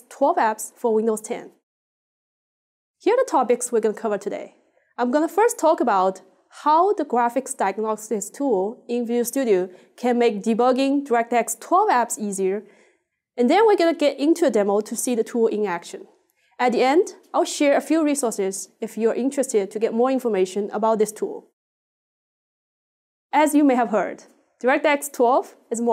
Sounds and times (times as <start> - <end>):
Speech: 0.0 - 1.6, 3.0 - 12.6, 13.4 - 21.6, 23.4 - 25.9.